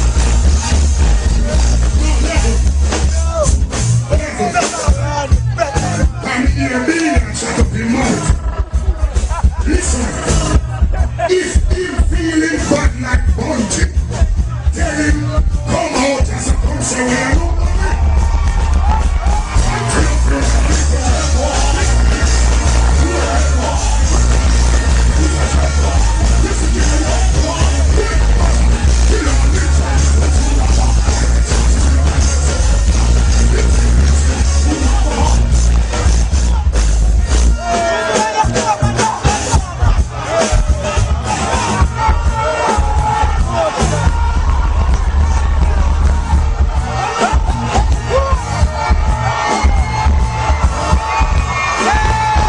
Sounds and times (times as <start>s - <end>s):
Music: 0.0s - 52.4s
Speech: 2.0s - 8.3s, 11.3s - 18.0s.